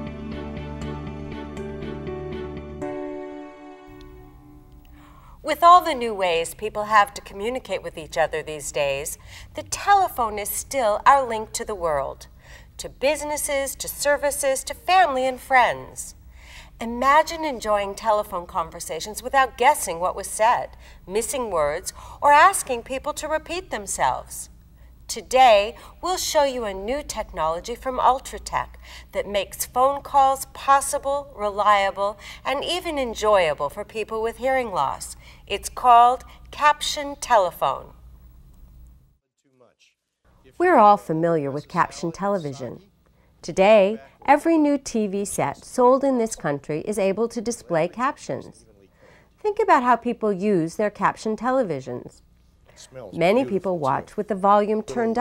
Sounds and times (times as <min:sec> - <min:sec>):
Speech: 0:05.5 - 0:16.2, 0:16.8 - 0:24.5, 0:40.5 - 0:48.8, 0:49.4 - 0:52.2, 0:52.8 - 0:55.2.